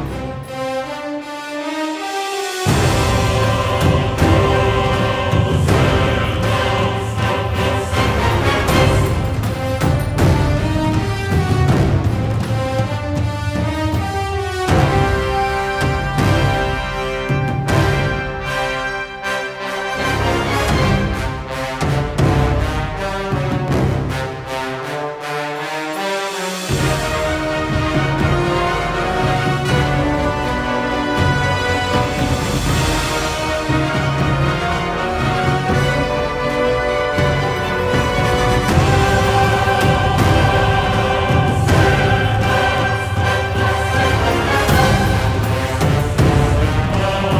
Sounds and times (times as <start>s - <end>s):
Scary music: 0.0s - 47.3s
Theme music: 0.0s - 47.3s.